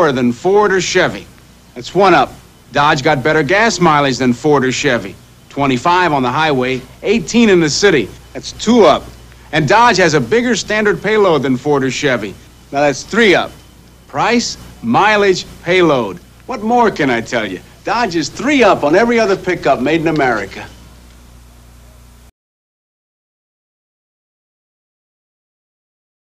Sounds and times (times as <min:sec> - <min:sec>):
Speech: 0:00.0 - 0:20.8.